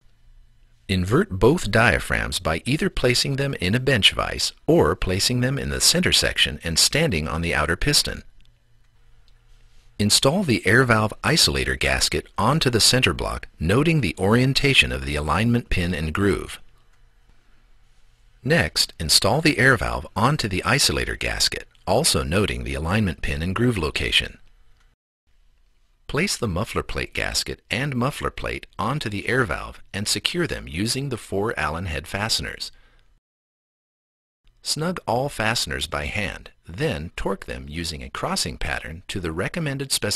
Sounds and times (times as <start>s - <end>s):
Speech: 0.9s - 8.3s, 10.0s - 16.6s, 18.4s - 24.4s, 26.1s - 32.8s, 34.6s - 40.1s.